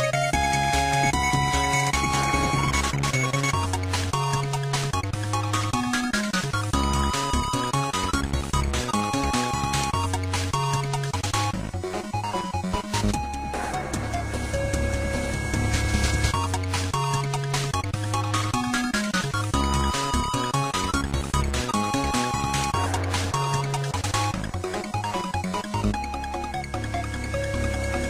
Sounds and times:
Video game music: 0:00.0 - 0:28.1.

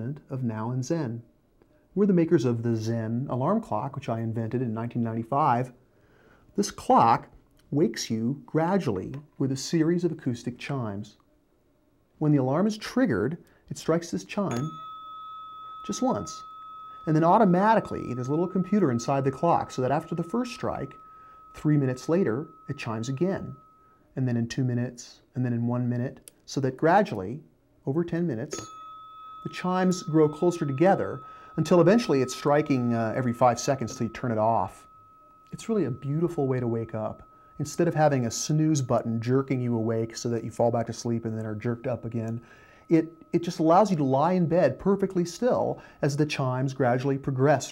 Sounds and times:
Speech: 0:00.0 - 0:01.3, 0:02.0 - 0:05.8, 0:06.6 - 0:11.2, 0:12.2 - 0:14.8, 0:15.9 - 0:16.4, 0:17.1 - 0:21.0, 0:21.6 - 0:23.6, 0:24.2 - 0:28.6, 0:29.5 - 0:34.9, 0:35.5 - 0:47.7.

